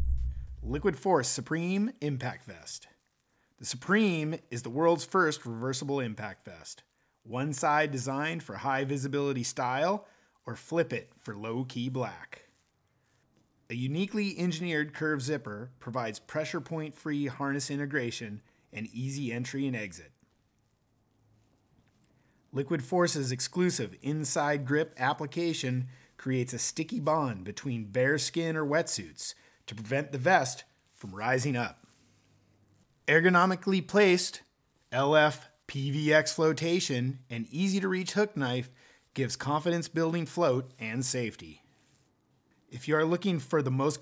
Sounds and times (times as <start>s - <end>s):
Speech: 0.6s - 3.0s, 3.6s - 12.5s, 13.7s - 20.2s, 22.5s - 31.8s, 33.1s - 41.6s, 42.7s - 44.0s.